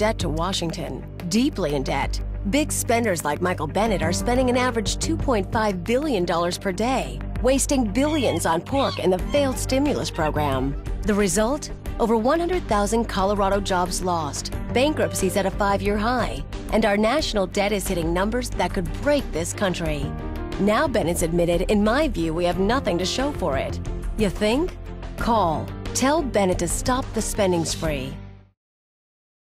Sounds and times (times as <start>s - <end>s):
Speech: 0.0s - 28.2s
Music: 0.0s - 28.6s.